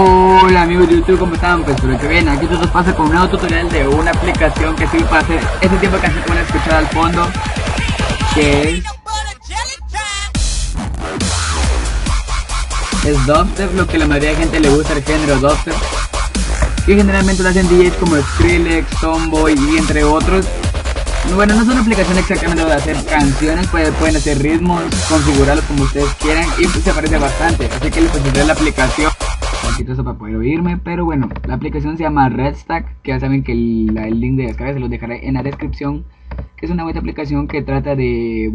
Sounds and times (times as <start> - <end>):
Speech: 0.0 - 7.4, 8.2 - 10.3, 13.0 - 15.8, 16.8 - 20.5, 21.2 - 36.0, 36.6 - 38.5
Electronic music: 0.0 - 29.9.